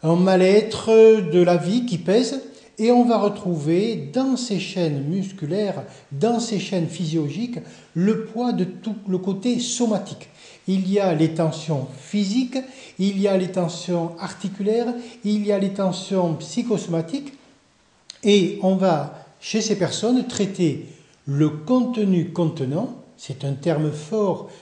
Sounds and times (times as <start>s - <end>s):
Speech: 0.0s - 17.4s, 18.1s - 24.5s.